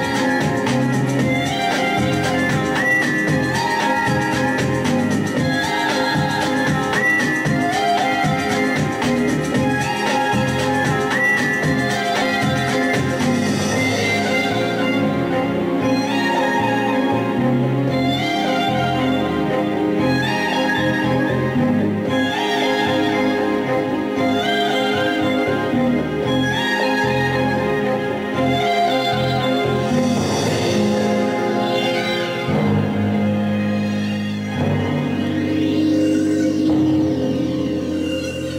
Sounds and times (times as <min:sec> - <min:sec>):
Music: 0:00.0 - 0:38.5.